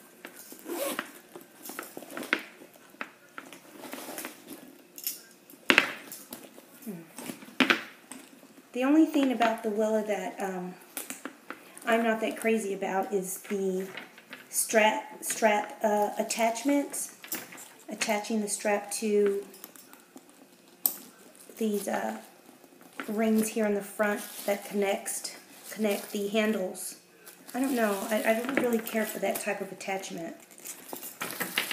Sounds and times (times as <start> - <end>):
Inside, small room: 0.0 - 31.7
Speech: 8.7 - 10.8, 11.8 - 17.2, 17.9 - 19.5, 21.6 - 22.3, 23.1 - 30.4.